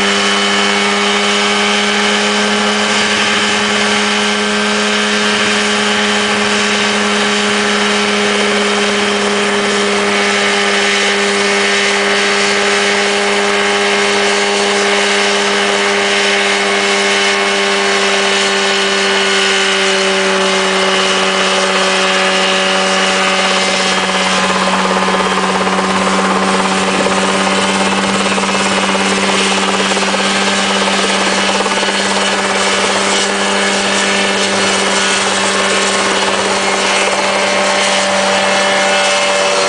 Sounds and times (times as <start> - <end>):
Helicopter: 0.0 - 39.6.